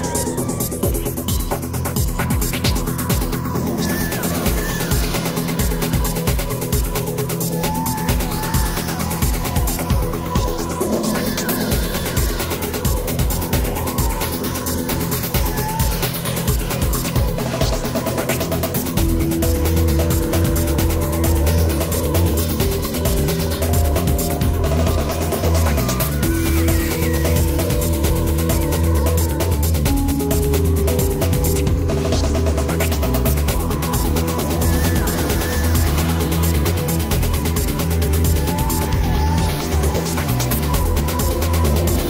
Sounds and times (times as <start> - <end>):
Music: 0.0 - 42.0.